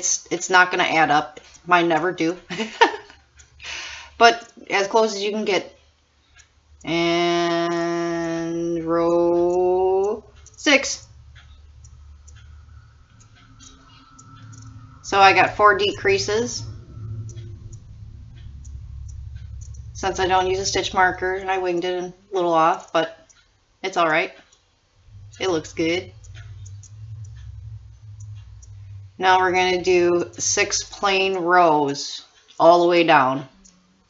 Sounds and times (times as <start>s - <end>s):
Speech: 0.0s - 2.5s, 4.2s - 5.7s, 6.9s - 11.1s, 15.1s - 16.7s, 20.0s - 23.2s, 23.8s - 24.4s, 25.4s - 26.2s, 29.2s - 33.6s
Inside, small room: 0.0s - 34.0s.